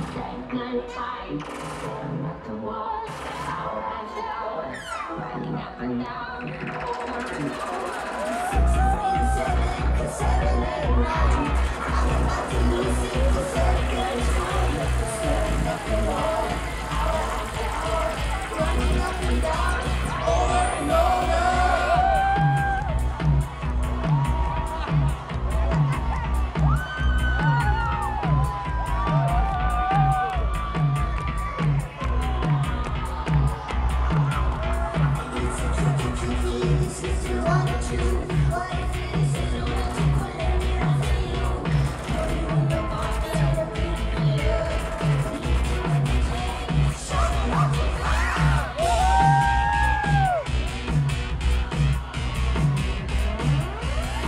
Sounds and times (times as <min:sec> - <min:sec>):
Music: 0:00.0 - 0:54.2.